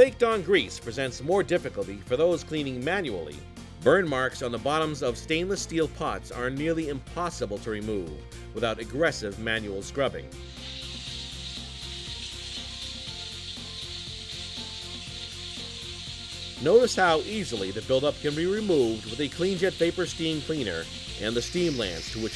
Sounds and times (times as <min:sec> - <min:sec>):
Speech: 0:00.0 - 0:10.3, 0:16.6 - 0:22.3
Music: 0:00.0 - 0:22.3.